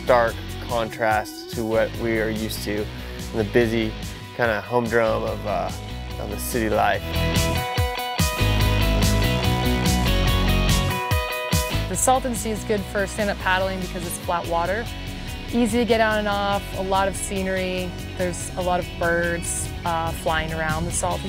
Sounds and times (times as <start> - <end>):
Speech: 0.0 - 7.0, 11.9 - 14.9, 15.6 - 21.2
Music: 0.0 - 21.2.